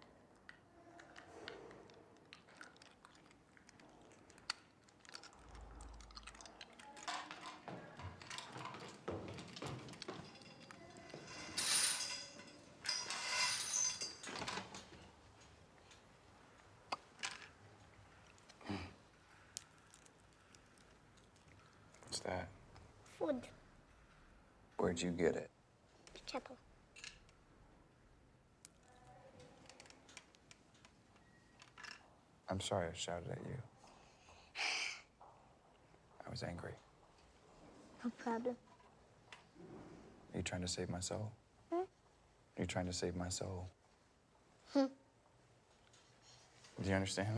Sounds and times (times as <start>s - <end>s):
Inside, small room: 0.0s - 47.3s.